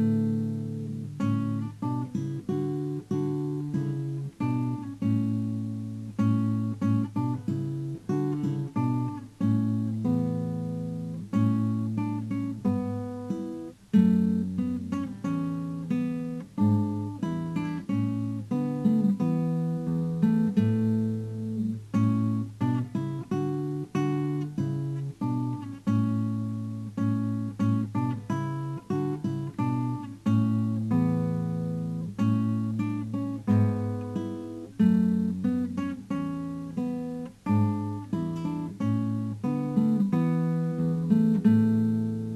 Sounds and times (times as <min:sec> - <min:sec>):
Acoustic guitar: 0:00.0 - 0:42.3.